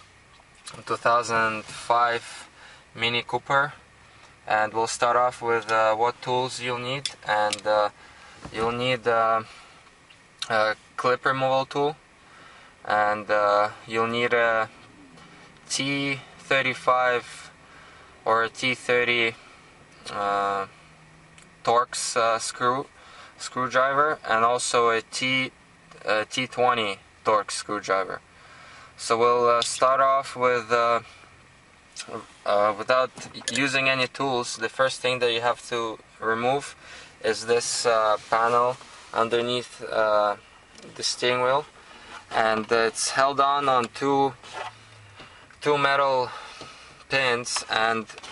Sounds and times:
Speech: 0.7 - 3.8, 4.5 - 7.9, 8.5 - 9.5, 10.4 - 12.0, 12.9 - 14.8, 15.7 - 17.5, 18.2 - 19.4, 20.1 - 20.7, 21.6 - 28.2, 29.0 - 31.1, 32.0 - 41.7, 42.3 - 44.4, 45.6 - 46.4, 47.1 - 48.2.

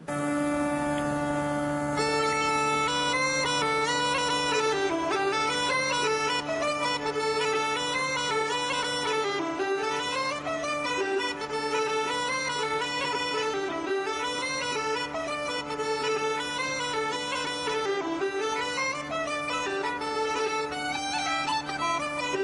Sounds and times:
Violin, fiddle: 0.0 - 22.4.

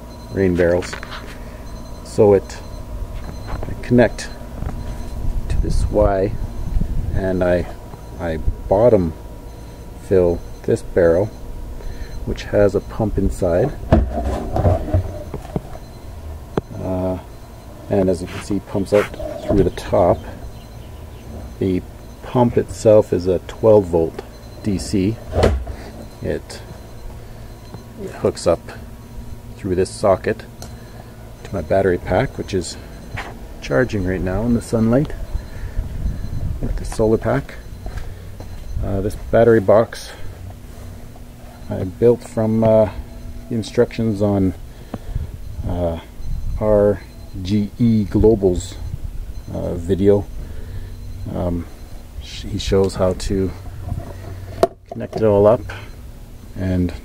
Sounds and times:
Speech: 0.3 - 1.0, 2.0 - 2.6, 3.7 - 4.4, 5.5 - 6.4, 7.2 - 9.2, 10.0 - 11.3, 12.3 - 13.8, 16.7 - 17.3, 17.9 - 20.4, 21.6 - 25.2, 26.2 - 26.6, 28.0 - 28.8, 29.6 - 30.5, 31.4 - 32.8, 33.6 - 35.2, 36.6 - 37.6, 38.8 - 40.2, 41.7 - 44.6, 45.6 - 48.8, 49.5 - 50.3, 51.2 - 53.6, 54.9 - 55.9, 56.6 - 57.0.

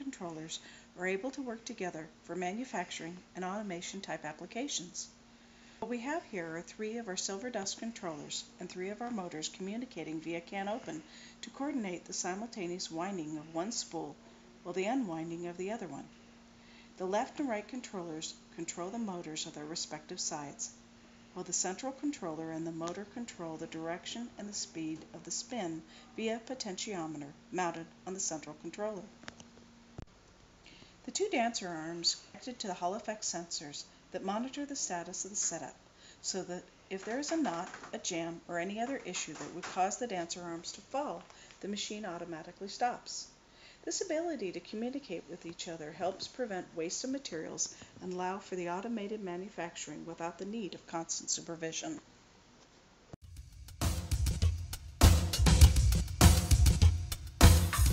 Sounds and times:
Speech: 0.0 - 5.2, 5.8 - 16.1, 17.0 - 20.8, 21.4 - 29.1, 31.0 - 52.0.

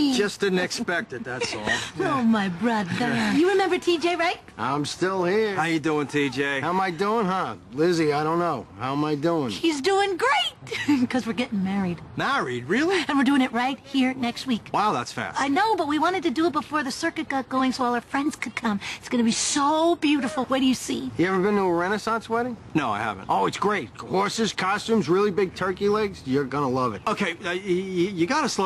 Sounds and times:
Outside, urban or manmade: 0.0 - 28.6.

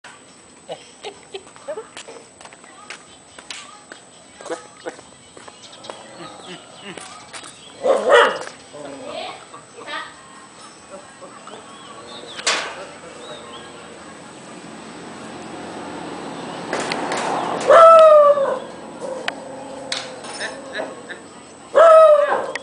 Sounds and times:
Bow-wow: 7.8 - 8.5.

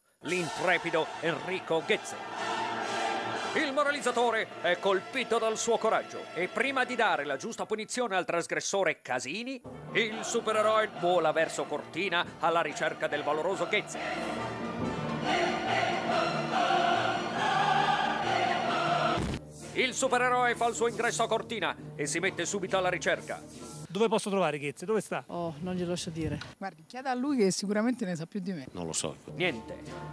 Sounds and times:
Music: 0.0 - 8.3, 9.6 - 24.0, 28.7 - 30.1.

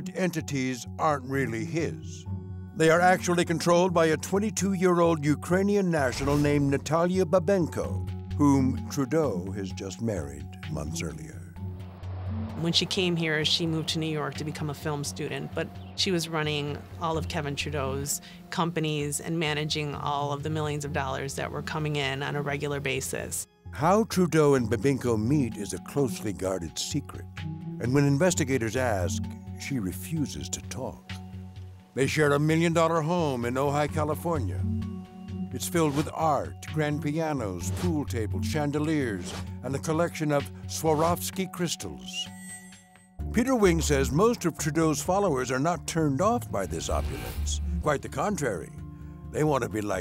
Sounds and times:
Speech: 0.0 - 2.2, 2.8 - 11.4, 12.6 - 27.2, 27.8 - 31.0, 32.0 - 34.6, 35.6 - 42.3, 43.3 - 48.7, 49.4 - 50.0
Music: 0.0 - 50.0.

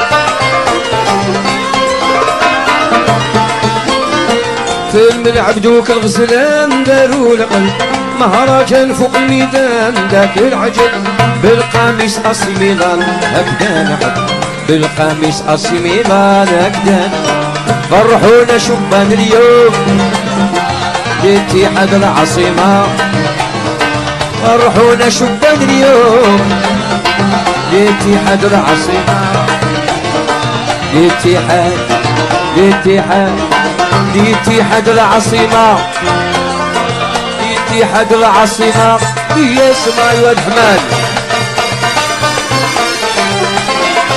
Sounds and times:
Music: 0.0 - 44.1.

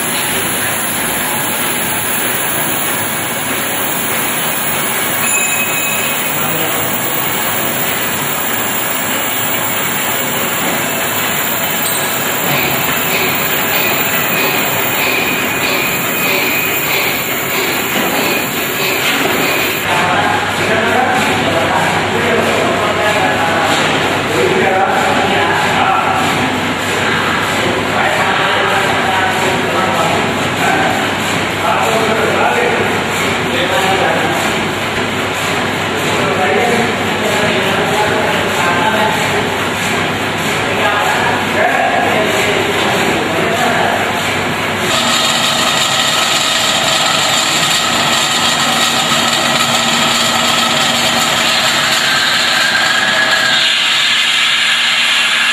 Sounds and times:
Speech: 6.0 - 7.5, 19.8 - 34.8, 35.9 - 44.3.

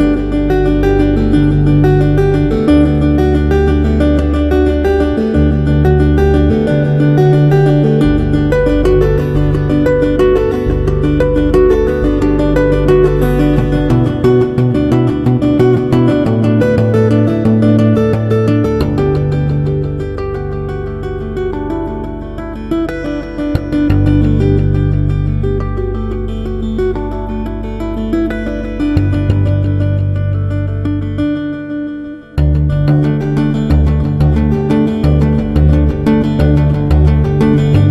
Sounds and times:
Music: 0.0 - 37.9.

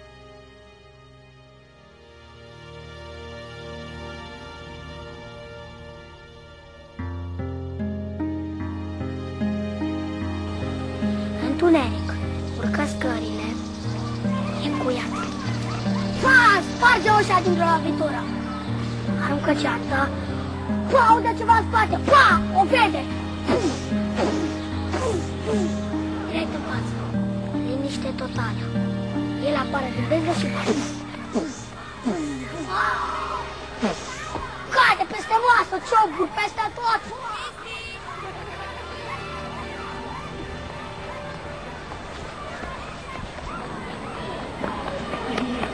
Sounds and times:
Music: 0.0 - 45.7
Child speech, kid speaking: 11.4 - 23.2, 25.0 - 27.0, 27.6 - 41.3.

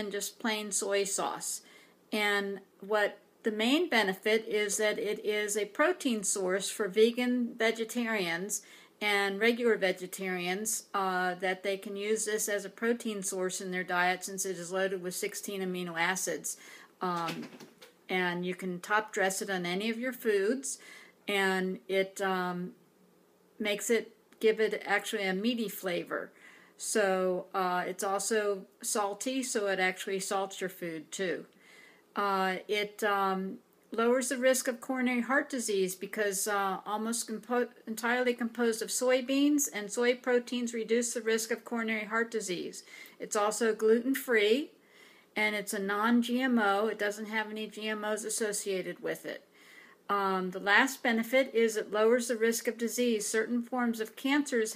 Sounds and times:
Speech: 0.0 - 1.6, 2.2 - 22.8, 23.6 - 31.5, 32.2 - 44.8, 45.4 - 49.5, 50.1 - 54.7.

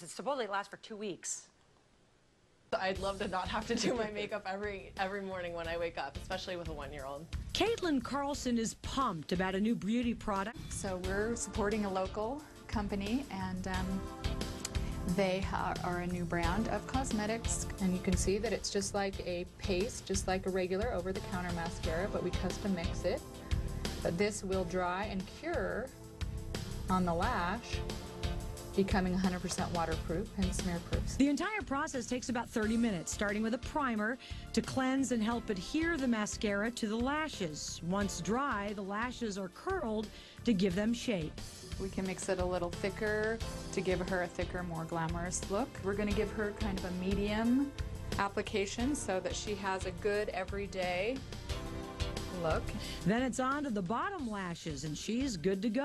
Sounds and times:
Speech: 0.0 - 1.6, 2.8 - 14.0, 15.1 - 23.2, 24.1 - 25.9, 26.9 - 27.8, 28.8 - 51.2, 52.4 - 55.8
Music: 2.8 - 55.8.

